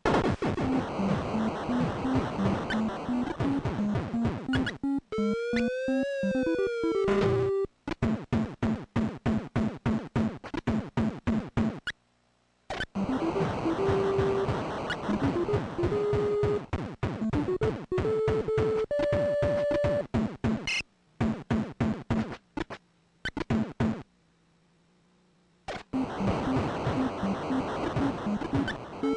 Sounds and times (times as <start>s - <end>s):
Music: 0.7s - 7.7s, 13.0s - 20.1s.